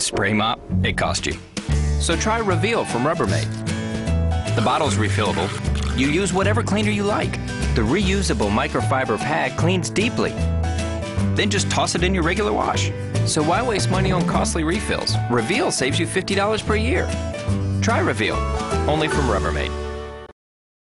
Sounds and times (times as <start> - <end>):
Speech: 0.0 - 1.4, 2.0 - 3.4, 4.6 - 10.3, 11.4 - 17.1, 17.8 - 19.7
Music: 0.0 - 20.4.